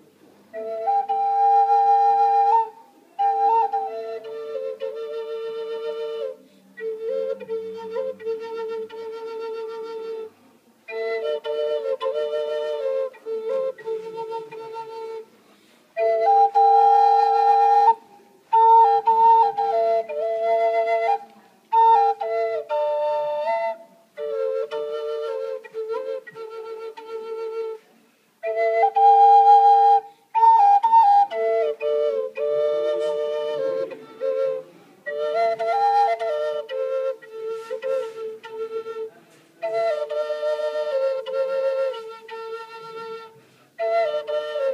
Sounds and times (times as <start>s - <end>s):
Flute: 0.0s - 44.7s.